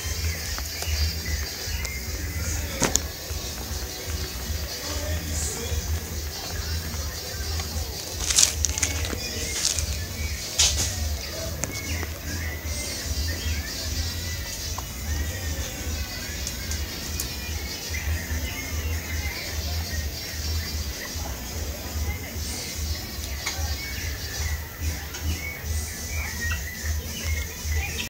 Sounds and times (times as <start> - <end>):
Music: 0.0 - 28.1
Speech: 0.0 - 28.1.